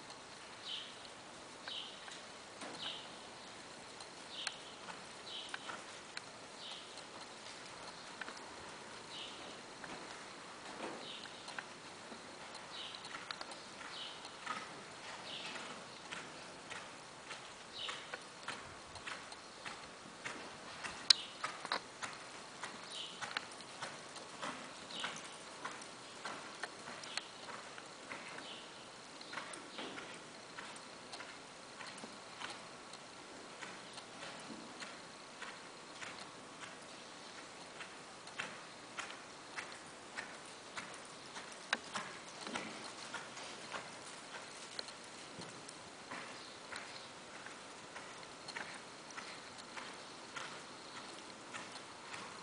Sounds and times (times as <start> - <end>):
Clip-clop: 0.0 - 52.4.